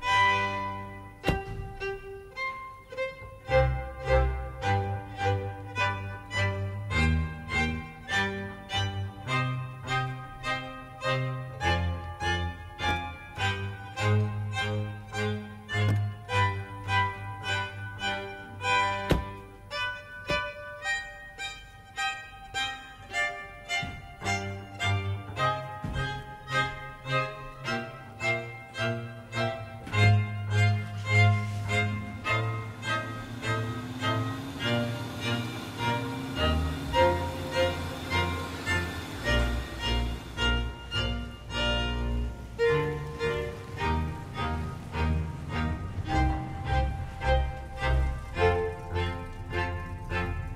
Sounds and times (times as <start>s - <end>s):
Music: 0.0s - 50.5s
Door: 1.3s - 1.8s, 19.1s - 19.4s.